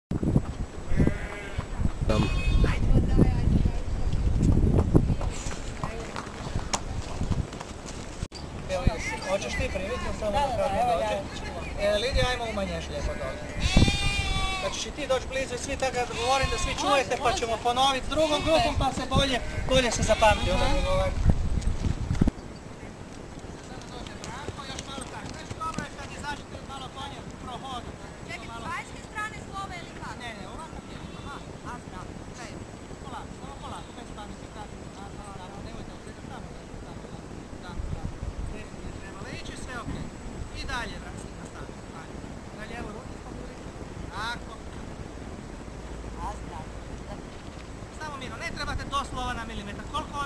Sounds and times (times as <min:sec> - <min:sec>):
Horse: 0:04.1 - 0:08.3, 0:23.2 - 0:26.3.